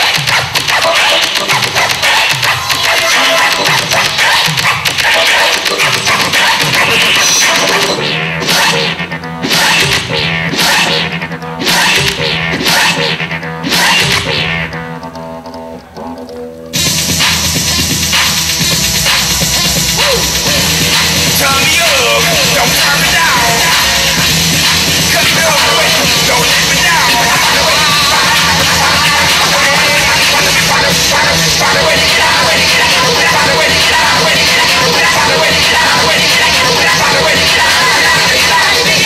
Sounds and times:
Electronic music: 0:00.0 - 0:39.0
Scratching (performance technique): 0:00.0 - 0:39.0.

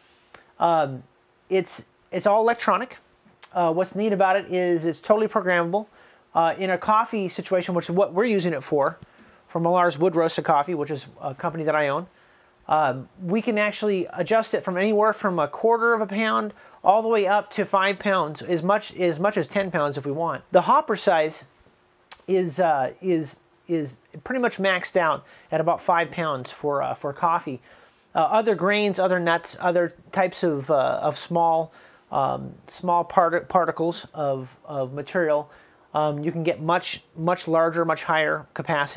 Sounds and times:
Speech: 0:00.6 - 0:12.1, 0:12.7 - 0:38.9.

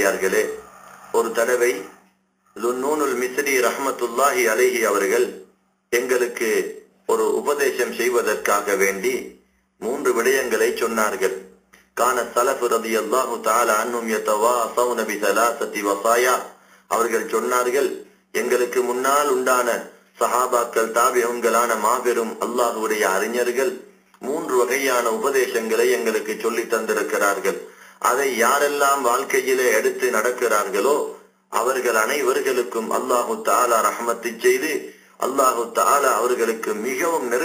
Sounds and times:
Male speech, man speaking: 0:00.0 - 0:37.4
Narration, monologue: 0:00.0 - 0:37.4.

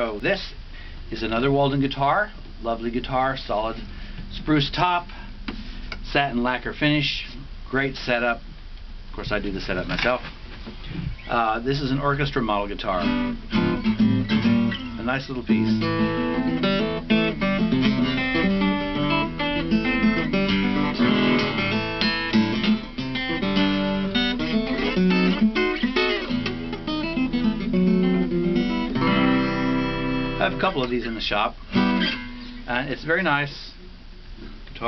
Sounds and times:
Speech: 0:00.0 - 0:05.2, 0:06.0 - 0:08.4, 0:09.1 - 0:10.3, 0:11.2 - 0:13.1, 0:15.0 - 0:15.9, 0:30.4 - 0:31.6, 0:32.7 - 0:33.8
Music: 0:13.0 - 0:30.8, 0:31.7 - 0:32.7.

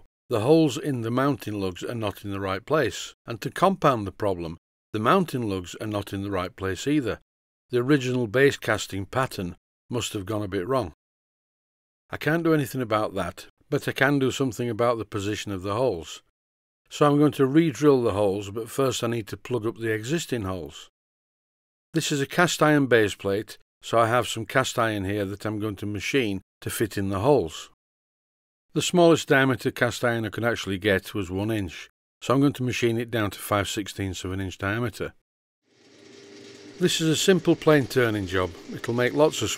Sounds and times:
Speech: 0:00.0 - 0:11.0, 0:12.1 - 0:16.3, 0:16.9 - 0:20.9, 0:22.0 - 0:27.8, 0:28.7 - 0:35.2, 0:36.8 - 0:39.5.

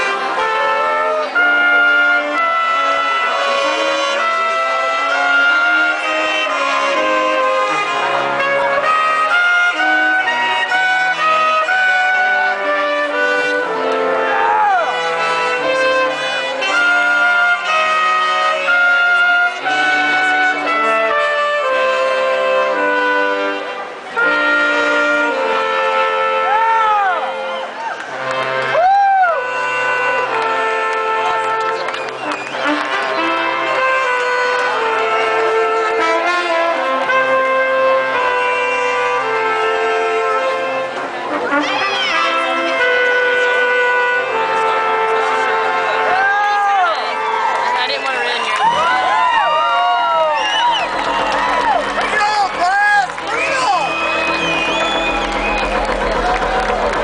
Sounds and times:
Music: 0:00.0 - 0:57.0.

